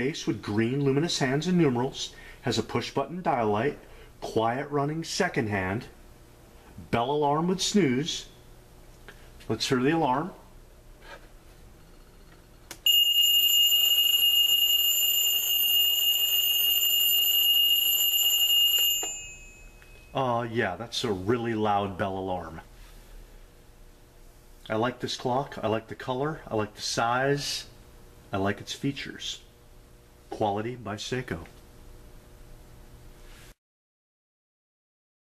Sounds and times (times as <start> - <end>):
Speech: 0.0 - 6.0, 6.8 - 8.4, 9.5 - 10.5, 20.1 - 22.7, 24.6 - 29.5, 30.3 - 31.6
Alarm clock: 12.9 - 20.0.